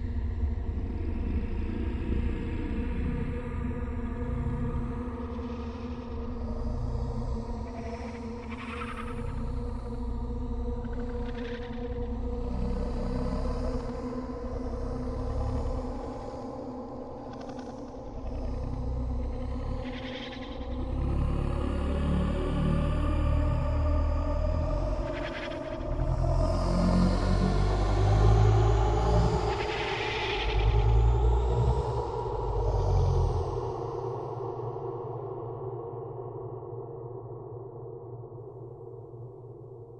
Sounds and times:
Scary music: 20.6 - 33.9.

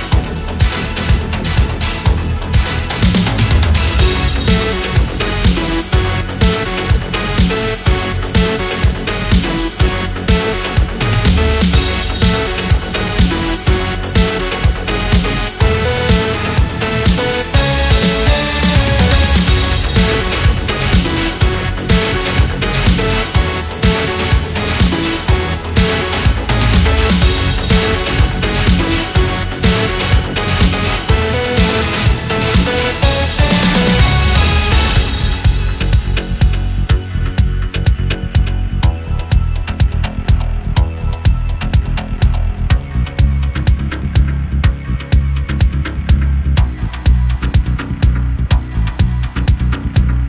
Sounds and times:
Music: 0.0 - 50.2.

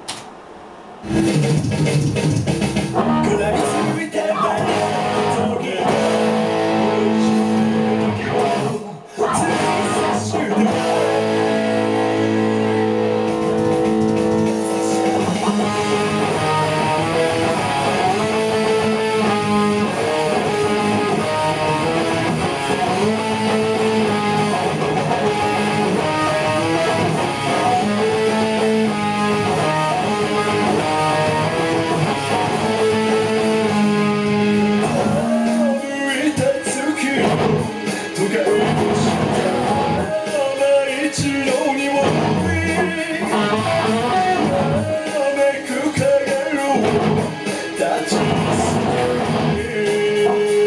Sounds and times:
Music: 1.0 - 50.6.

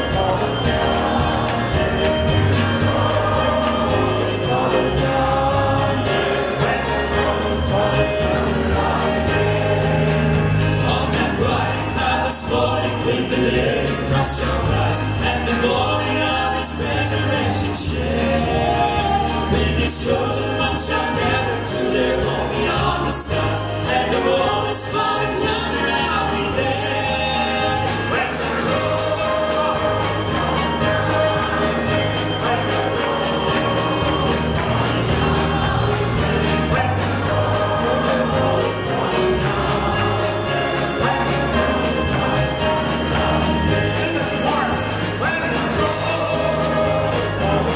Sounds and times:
Gospel music: 0.0 - 47.7
Traditional music: 0.0 - 47.7.

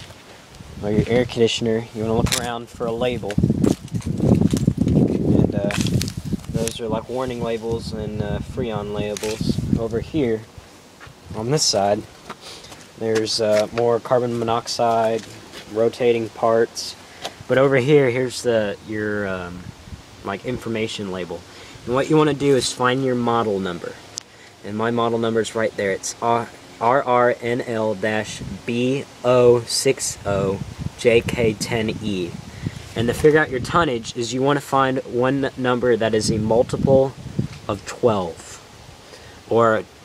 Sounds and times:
Speech: 0.8 - 3.4, 5.4 - 5.9, 6.6 - 10.5, 11.3 - 12.1, 13.0 - 24.0, 24.6 - 32.4, 33.0 - 38.6, 39.5 - 39.9.

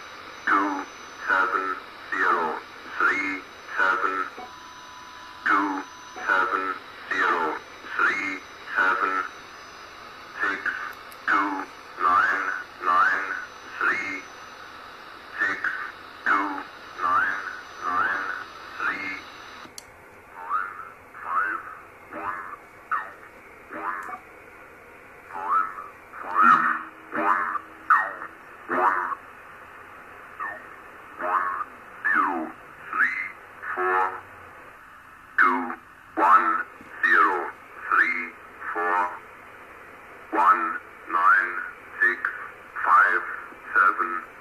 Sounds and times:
Radio: 0.0 - 19.7, 20.3 - 24.3, 25.3 - 34.8, 35.4 - 44.4
Speech: 0.5 - 4.5, 5.4 - 9.4, 10.4 - 14.3, 15.4 - 19.3, 20.4 - 24.2, 25.3 - 29.2, 30.4 - 34.2, 35.4 - 39.2, 40.3 - 44.4.

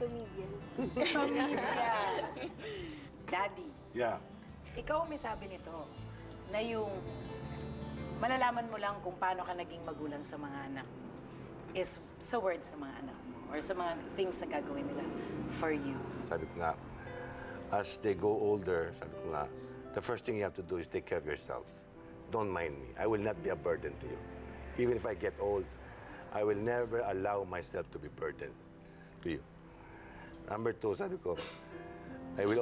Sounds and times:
Female speech, woman speaking: 0.0 - 2.4, 3.3 - 3.8, 4.7 - 5.9, 6.5 - 7.1, 8.2 - 10.9, 11.8 - 16.1.

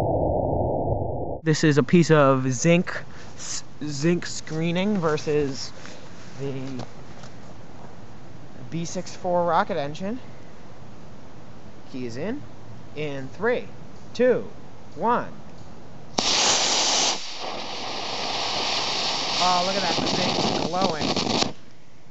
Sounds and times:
Speech: 1.4 - 5.7, 6.4 - 6.9, 8.6 - 10.2, 11.9 - 12.4, 13.0 - 15.4, 19.4 - 21.1.

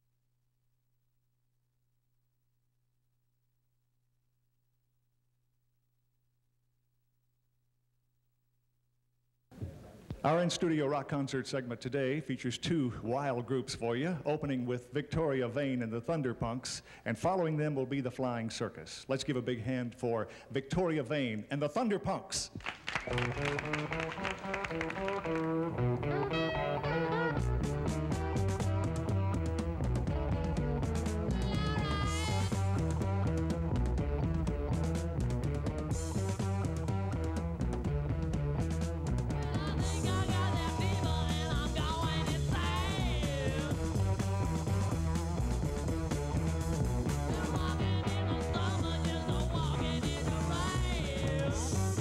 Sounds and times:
Music: 22.6 - 52.0.

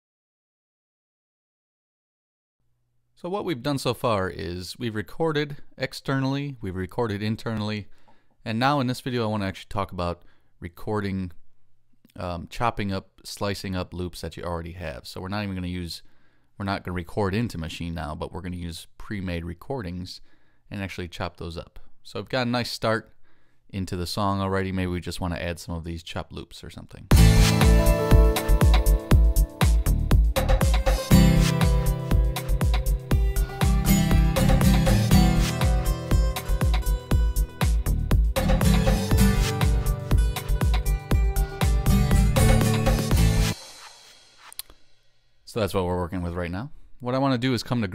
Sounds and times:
Sampler: 27.1 - 44.7.

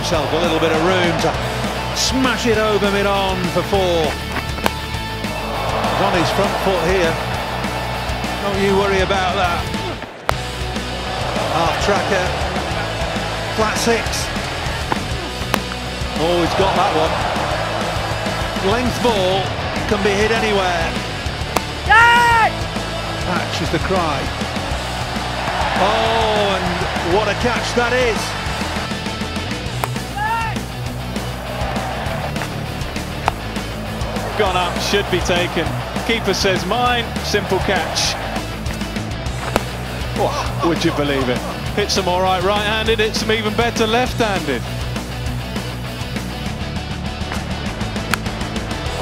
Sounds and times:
Speech: 0.0 - 1.4, 2.0 - 4.2, 5.9 - 7.2, 8.4 - 9.8, 11.5 - 12.4, 13.5 - 14.3, 16.2 - 17.2, 18.6 - 20.9, 23.2 - 24.3, 25.7 - 28.4, 34.3 - 38.2, 40.2 - 44.6
Music: 0.0 - 49.0.

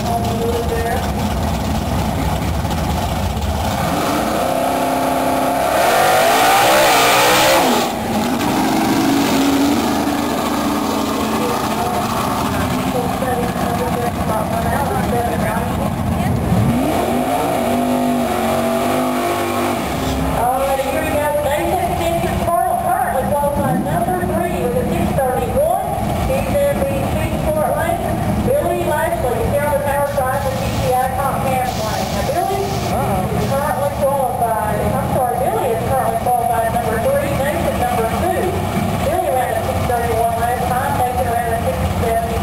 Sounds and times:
Speech: 0.0 - 1.2, 11.4 - 16.4, 20.4 - 42.4.

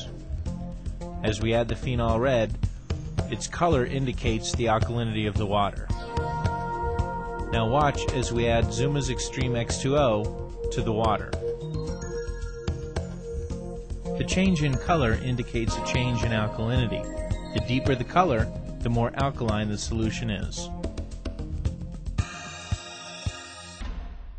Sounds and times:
Music: 0.0 - 24.3
Speech: 1.2 - 2.6, 3.3 - 6.0, 7.5 - 11.4, 14.2 - 20.7.

